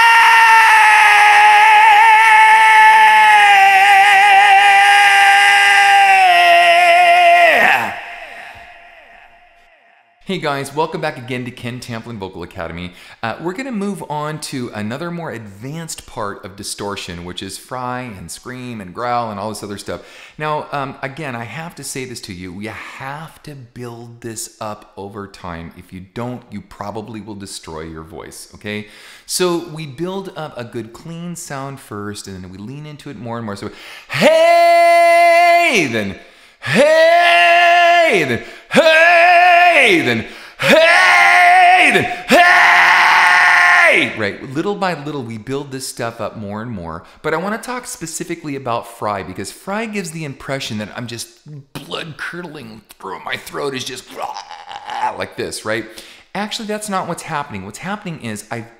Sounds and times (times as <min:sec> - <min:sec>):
Speech: 0:10.2 - 0:42.6, 0:43.7 - 0:58.7.